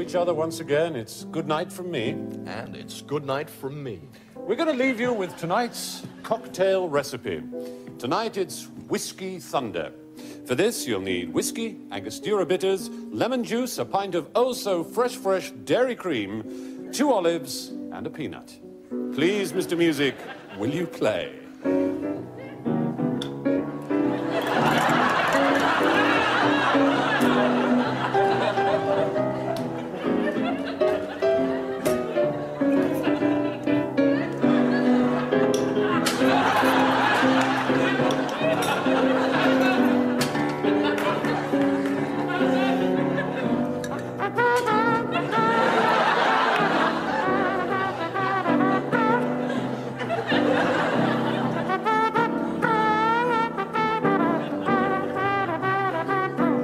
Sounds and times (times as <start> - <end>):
Music: 0.0 - 56.6
Speech: 19.2 - 21.5.